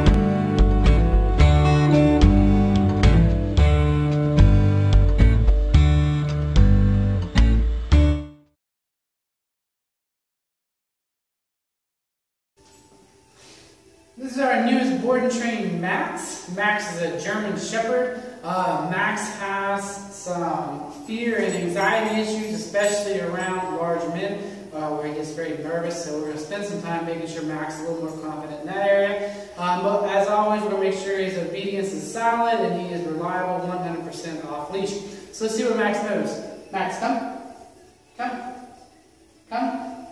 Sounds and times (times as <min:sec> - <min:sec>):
Speech: 0:14.2 - 0:37.5, 0:39.5 - 0:40.0.